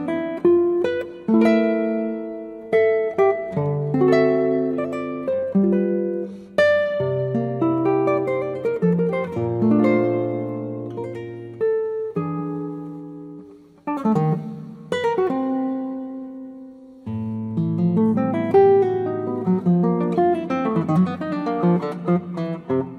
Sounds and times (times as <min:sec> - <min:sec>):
Acoustic guitar: 0:00.0 - 0:22.9.